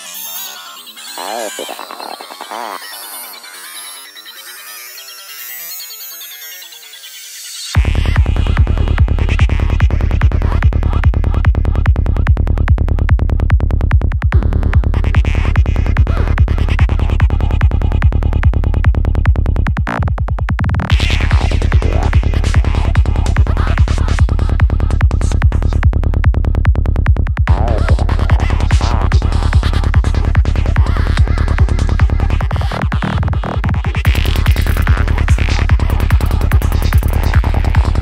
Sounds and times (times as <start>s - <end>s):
Music: 7.4s - 38.0s.